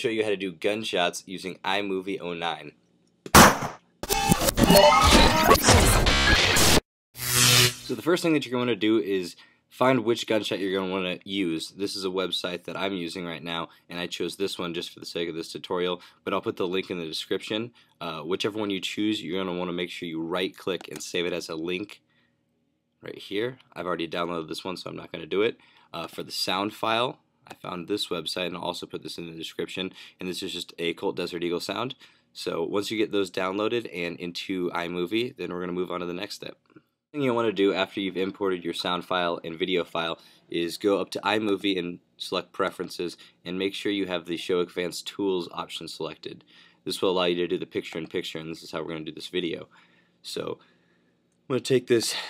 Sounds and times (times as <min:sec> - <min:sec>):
Speech: 0:00.0 - 0:02.7, 0:07.9 - 0:22.0, 0:23.0 - 0:36.6, 0:37.2 - 0:50.6, 0:51.5 - 0:52.2.